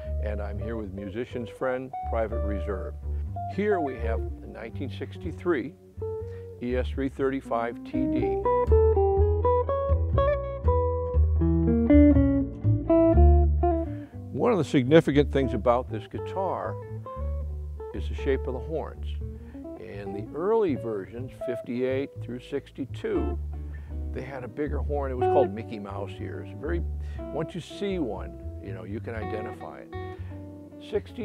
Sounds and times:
Guitar: 0.0s - 31.2s
Speech: 0.1s - 2.9s, 3.5s - 5.8s, 6.6s - 8.5s, 14.3s - 16.8s, 18.0s - 19.2s, 19.8s - 23.4s, 24.1s - 30.0s, 30.8s - 31.2s.

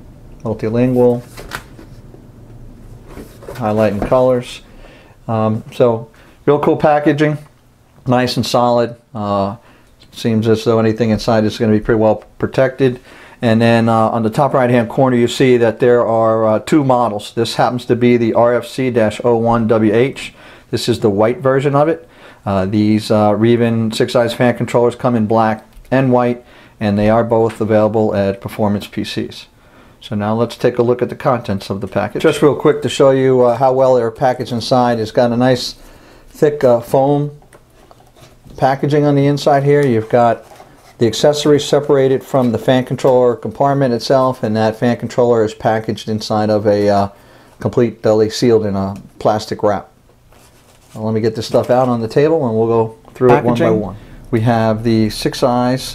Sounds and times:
Speech: 0.4s - 1.3s, 3.5s - 4.7s, 5.3s - 35.8s, 36.4s - 37.4s, 38.5s - 50.0s, 50.9s - 55.9s.

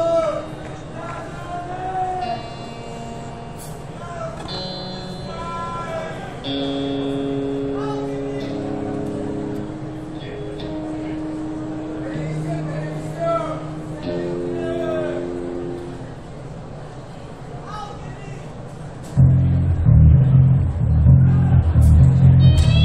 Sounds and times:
Speech: 0.0s - 2.5s, 3.9s - 4.5s, 5.2s - 6.5s, 7.7s - 9.4s, 12.0s - 15.4s, 17.1s - 18.6s
Music: 4.4s - 16.1s, 19.1s - 22.8s.

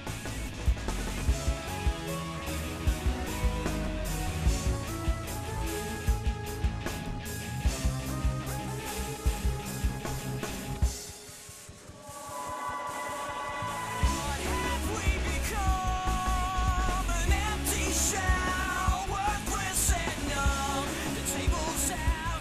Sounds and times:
Music: 0.0s - 22.4s.

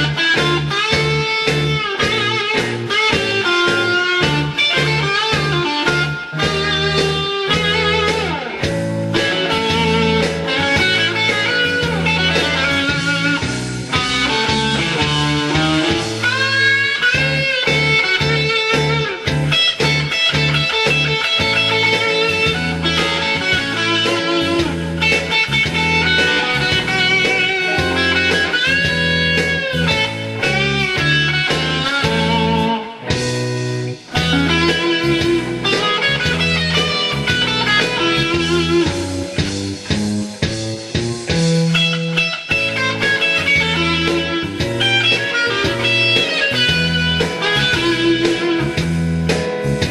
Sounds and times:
Guitar: 0.0s - 49.9s
Punk rock: 0.0s - 49.9s.

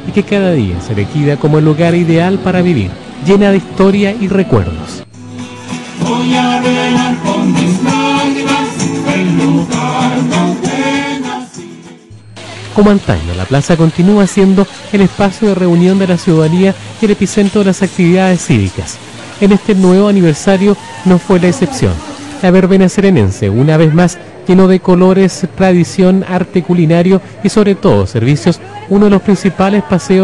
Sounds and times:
Speech: 0.0s - 5.0s, 12.4s - 30.2s.

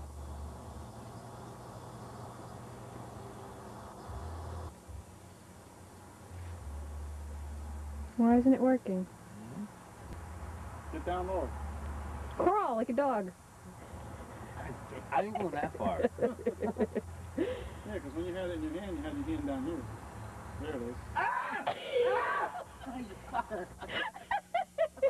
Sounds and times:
Speech: 14.6s - 16.7s.

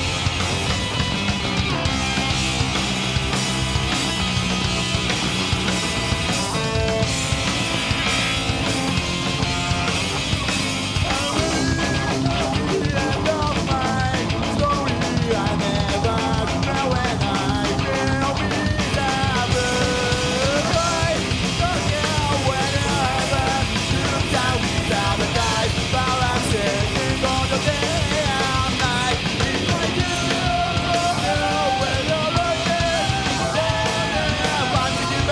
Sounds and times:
Music: 0.0s - 35.3s.

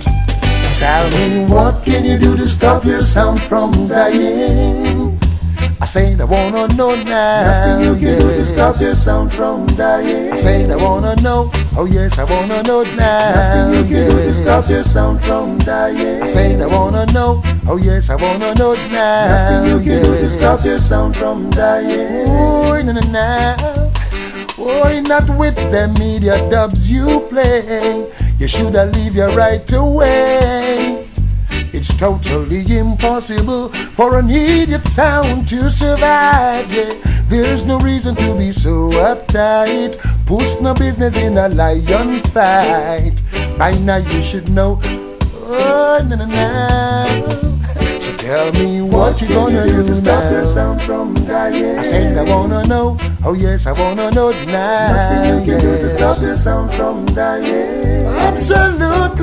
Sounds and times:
Music: 0.0s - 59.2s.

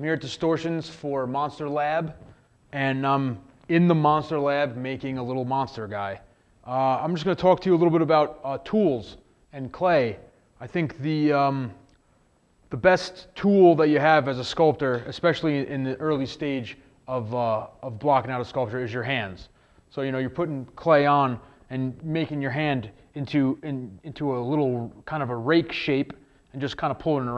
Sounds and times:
Speech: 0.0s - 11.8s, 12.7s - 27.3s.

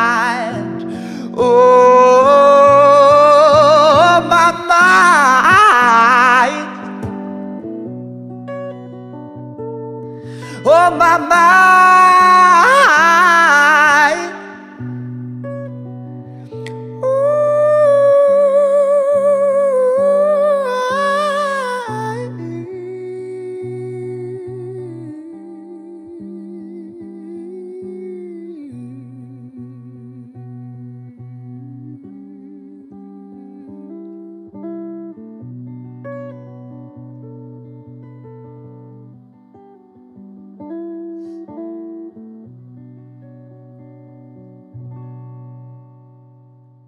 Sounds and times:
Acoustic guitar: 0.0s - 46.8s.

